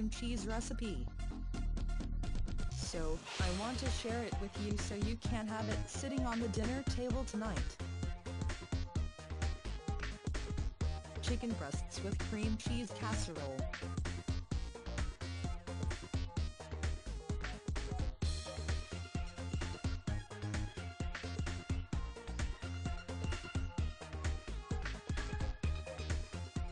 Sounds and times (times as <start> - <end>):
Speech: 0.0 - 1.1, 2.8 - 7.8, 11.2 - 13.7
Music: 0.0 - 26.7.